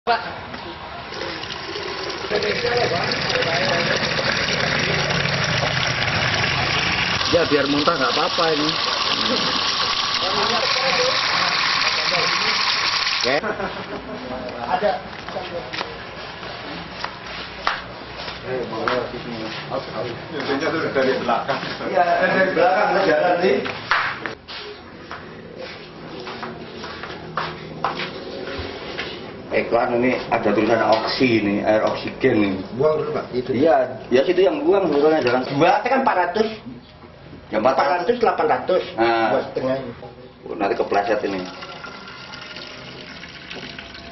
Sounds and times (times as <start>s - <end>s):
Water: 1.1s - 13.4s, 41.2s - 44.1s
Water tap, faucet: 1.1s - 13.4s, 41.0s - 44.1s.